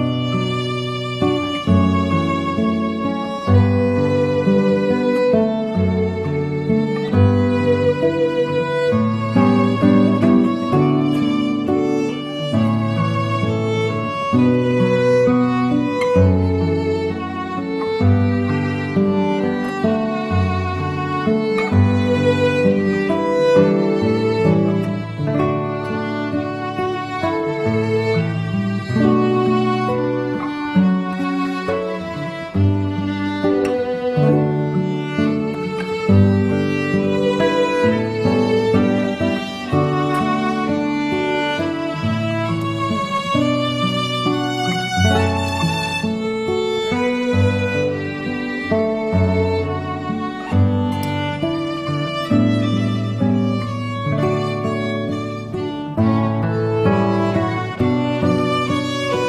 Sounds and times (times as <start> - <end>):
Acoustic guitar: 0.0 - 59.2
Violin, fiddle: 0.0 - 59.2.